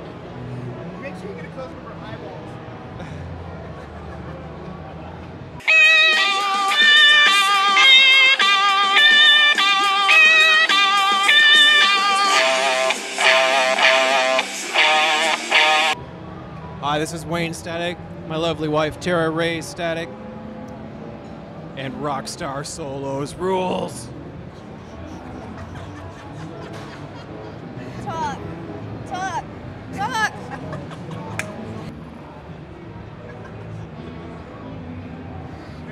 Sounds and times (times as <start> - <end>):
Music: 5.5 - 17.1, 20.0 - 35.9.